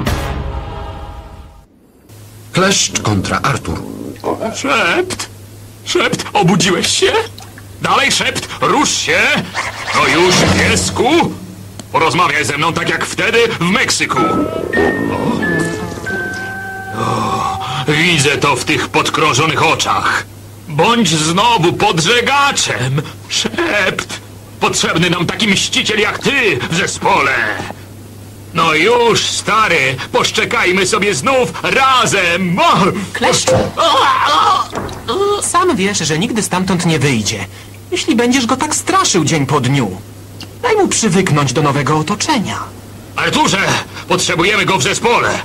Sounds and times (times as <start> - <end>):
Speech: 2.5 - 14.4, 17.2 - 27.8, 28.5 - 45.4.